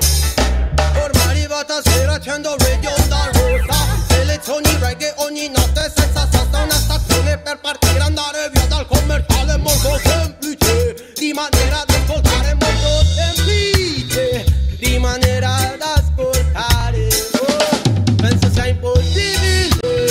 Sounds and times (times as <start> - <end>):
Reggae: 0.0 - 20.1.